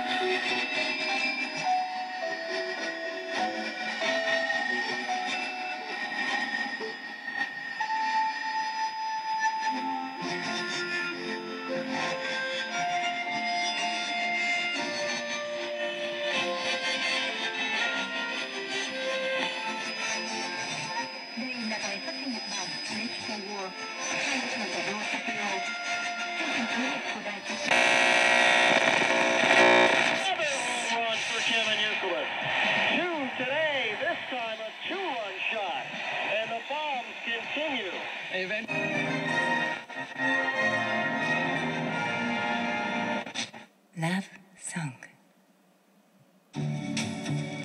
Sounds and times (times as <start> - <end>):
Music: 0.0 - 27.8, 30.3 - 43.7, 46.5 - 47.6
Radio: 19.4 - 40.2
Speech: 30.2 - 32.3, 32.9 - 38.7, 44.0 - 45.2.